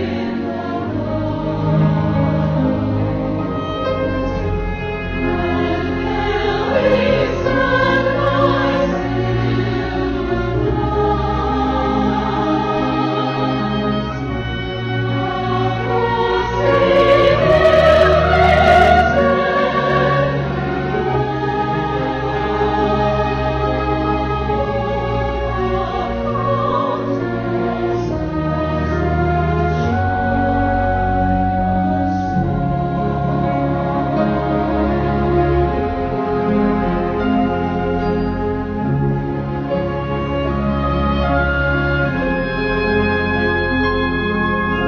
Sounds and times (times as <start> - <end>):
Christmas music: 0.0 - 44.8.